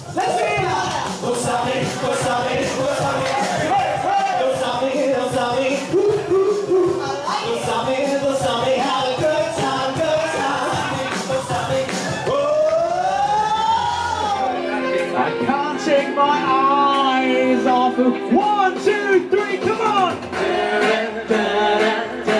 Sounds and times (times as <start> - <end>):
Music: 0.0 - 22.3
Rapping: 0.2 - 13.8, 15.2 - 20.2
Male singing: 0.4 - 22.3.